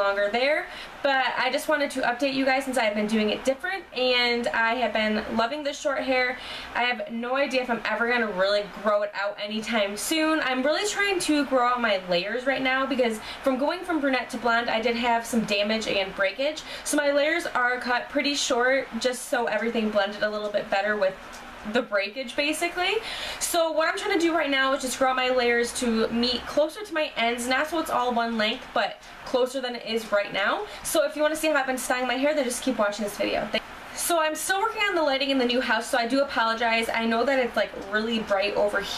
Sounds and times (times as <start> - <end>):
Speech: 0.0 - 38.9.